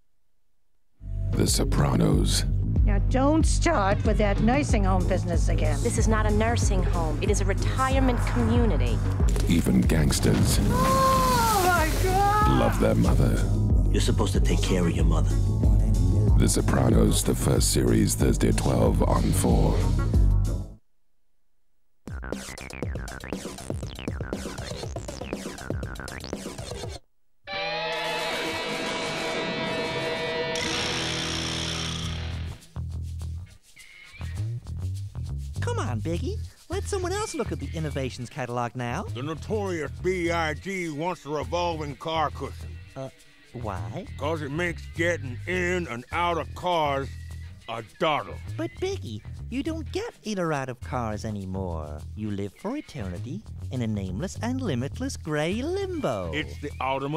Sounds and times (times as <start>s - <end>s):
Speech: 1.4s - 10.6s, 12.1s - 15.4s, 16.4s - 19.9s, 35.6s - 47.1s, 47.7s - 57.1s.